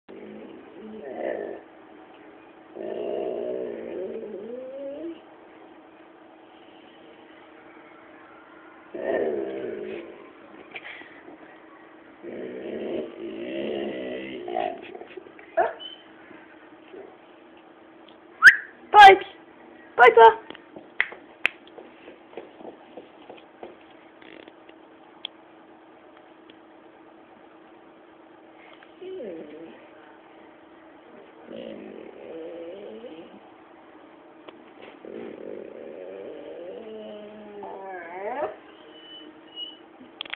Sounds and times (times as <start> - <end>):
Whimper (dog): 15.6 - 16.1, 29.0 - 29.8, 36.1 - 39.9.